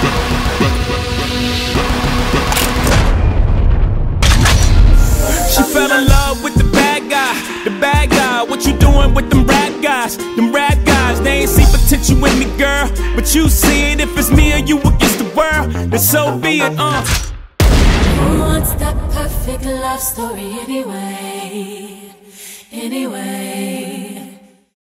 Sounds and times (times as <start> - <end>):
Music: 0.0 - 4.1, 4.7 - 17.4.